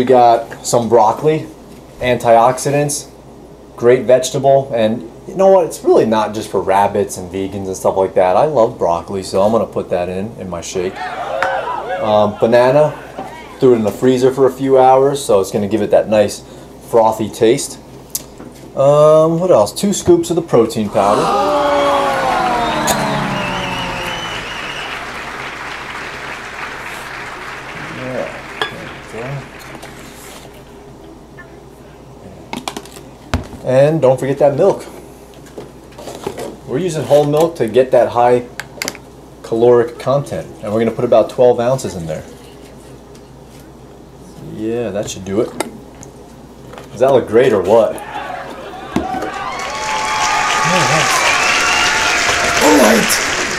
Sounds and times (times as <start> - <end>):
Speech: 0.0 - 3.2, 3.8 - 11.0, 12.0 - 17.9, 18.8 - 23.2, 33.6 - 35.0, 36.7 - 38.6, 39.4 - 42.4, 44.3 - 45.8, 46.9 - 48.0.